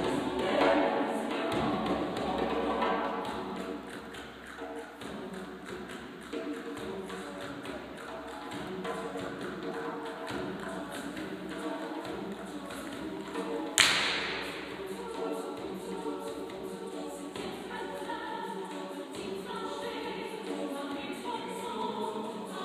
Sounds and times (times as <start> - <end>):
Orchestra: 0.0 - 22.6.